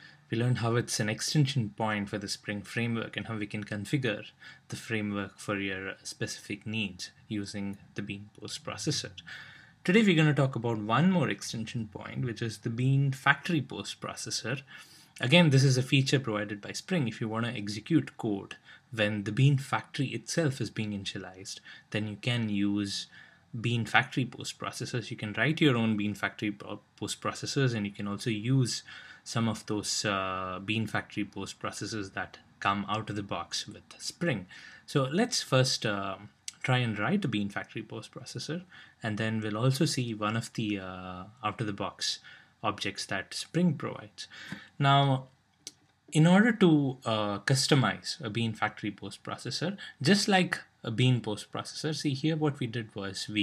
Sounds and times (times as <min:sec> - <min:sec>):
Speech: 0:00.0 - 0:45.3, 0:46.1 - 0:53.4.